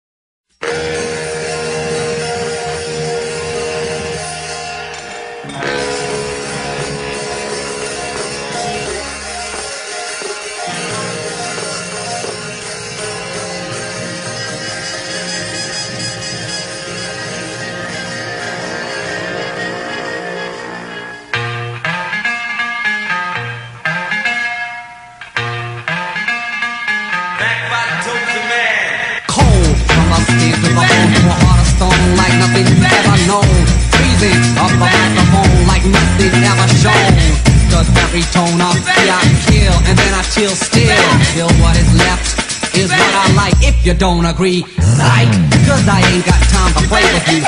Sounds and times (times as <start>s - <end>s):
Pop music: 0.6s - 22.2s, 27.1s - 47.4s.